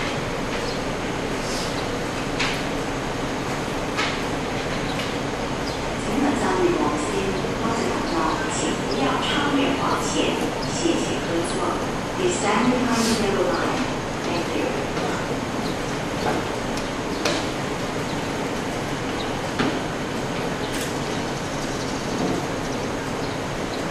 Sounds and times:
Speech: 0:06.0 - 0:15.4.

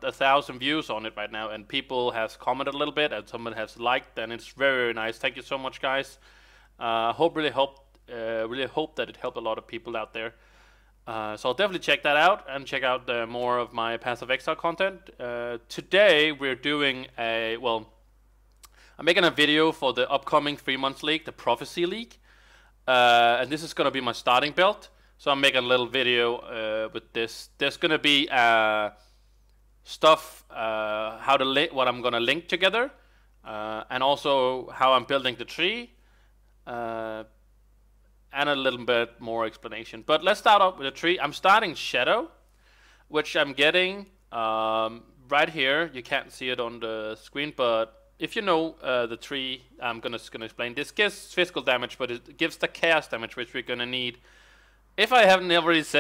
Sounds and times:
Speech: 0:00.0 - 0:06.2, 0:06.8 - 0:10.4, 0:11.1 - 0:18.0, 0:19.0 - 0:22.2, 0:22.9 - 0:29.0, 0:29.9 - 0:36.0, 0:36.7 - 0:37.4, 0:38.3 - 0:42.4, 0:43.1 - 0:54.2, 0:55.0 - 0:56.0.

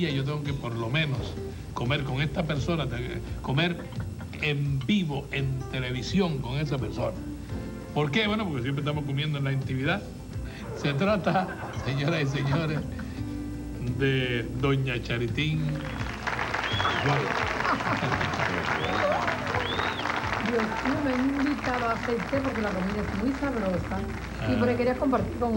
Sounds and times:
Male speech, man speaking: 0:00.0 - 0:07.2, 0:08.0 - 0:10.1, 0:10.8 - 0:12.8, 0:13.8 - 0:15.8, 0:16.9 - 0:17.4, 0:18.0 - 0:18.9, 0:24.4 - 0:24.9
Music: 0:00.0 - 0:25.5.

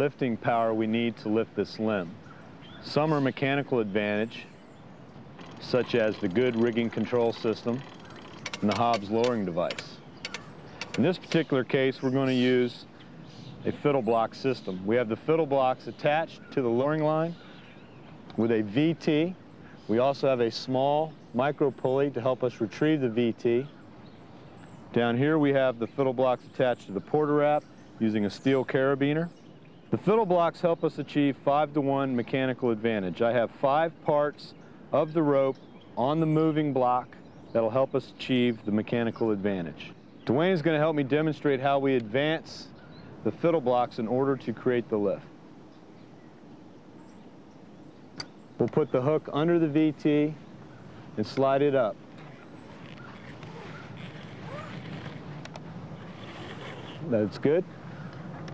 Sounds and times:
Speech: 0:00.0 - 0:02.2, 0:02.8 - 0:04.6, 0:05.6 - 0:07.9, 0:08.6 - 0:10.0, 0:11.0 - 0:12.9, 0:13.6 - 0:17.4, 0:18.3 - 0:23.8, 0:24.9 - 0:29.3, 0:29.9 - 0:45.3, 0:48.6 - 0:50.4, 0:51.2 - 0:52.0, 0:57.0 - 0:57.7.

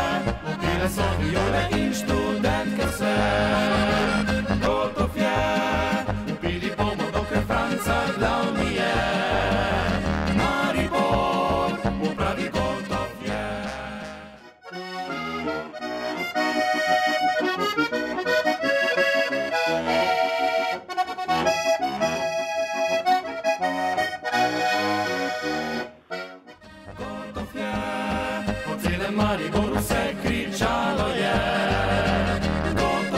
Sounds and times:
Traditional music: 0:00.0 - 0:05.2, 0:32.3 - 0:33.1
Accordion: 0:00.0 - 0:33.1.

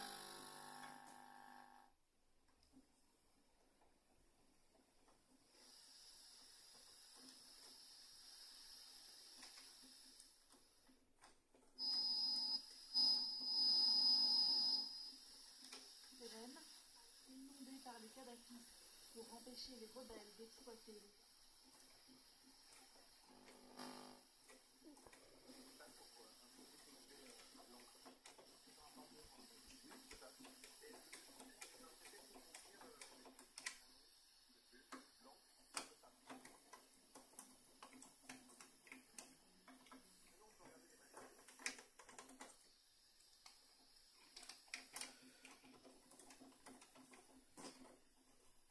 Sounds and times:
Television: 0:00.0 - 0:48.7.

